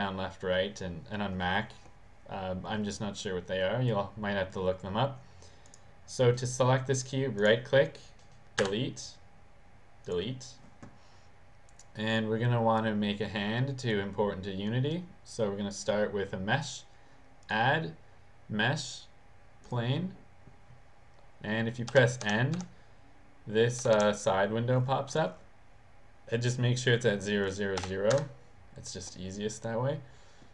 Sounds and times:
Speech: 0.0s - 5.2s, 6.1s - 9.2s, 10.1s - 10.6s, 12.0s - 16.9s, 17.5s - 20.2s, 21.4s - 22.7s, 23.5s - 25.5s, 26.3s - 30.1s.

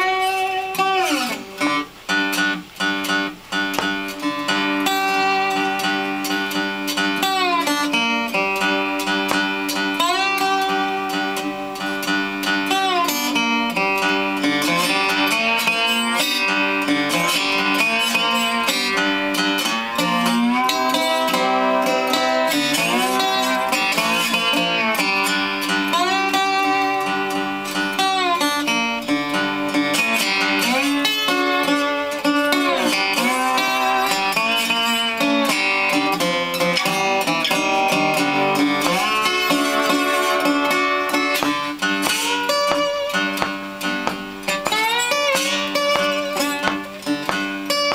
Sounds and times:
Electric guitar: 0.0s - 47.9s
Strum: 0.0s - 47.9s.

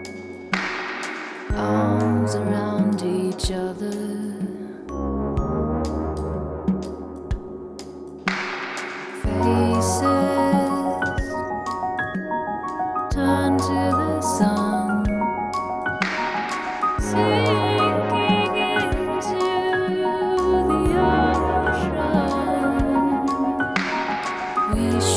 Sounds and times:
Music: 0.0s - 25.1s.

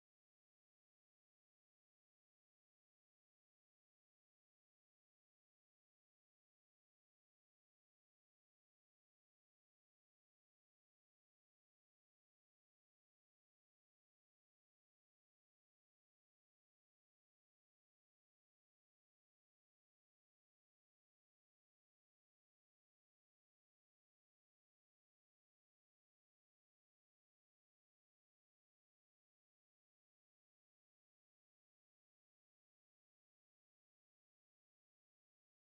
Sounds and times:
Silence: 0.0s - 35.7s.

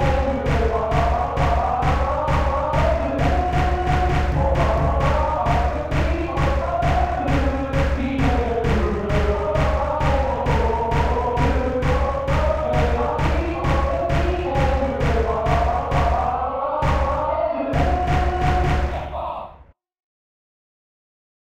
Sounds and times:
Music: 0.0s - 19.8s.

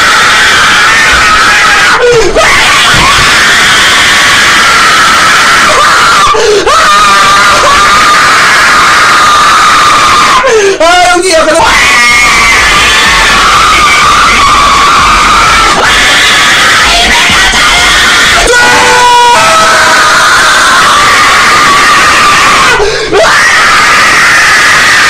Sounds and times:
Screaming: 0.0s - 25.1s
Speech: 10.8s - 11.7s.

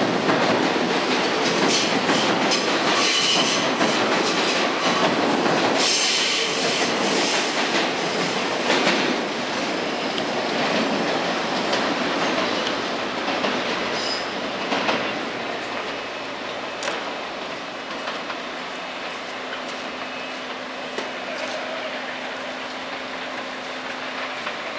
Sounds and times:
Clickety-clack: 0.0s - 9.2s, 10.2s - 15.2s
Railroad car, train wagon: 0.0s - 24.7s
Train: 0.0s - 24.7s.

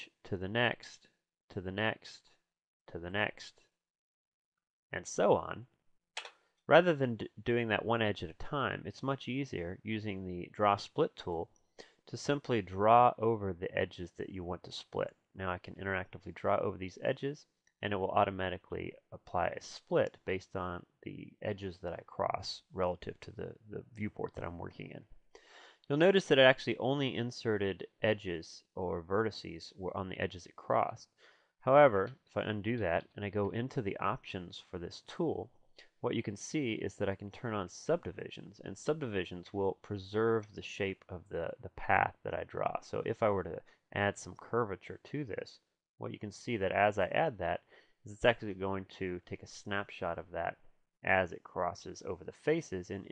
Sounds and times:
Speech: 0.0s - 3.7s, 4.9s - 5.8s, 6.7s - 11.5s, 12.1s - 25.2s, 25.9s - 53.1s.

